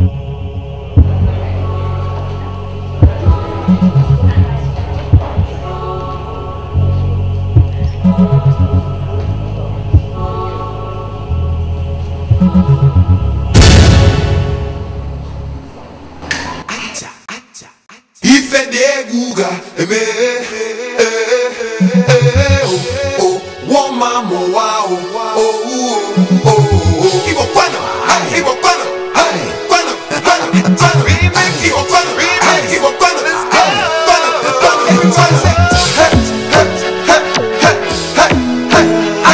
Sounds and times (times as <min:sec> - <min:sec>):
Music: 0:00.0 - 0:16.6, 0:19.6 - 0:39.3.